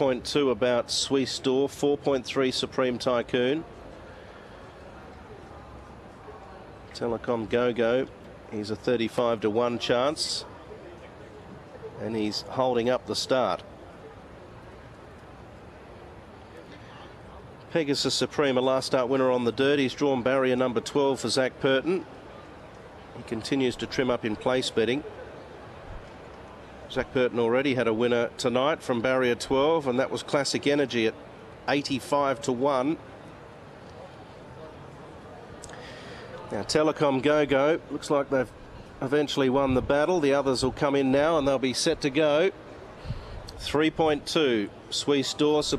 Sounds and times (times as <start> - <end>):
Speech: 0.0 - 3.8, 5.0 - 13.7, 16.8 - 22.1, 23.1 - 25.3, 26.9 - 33.0, 36.2 - 42.6, 43.5 - 45.7.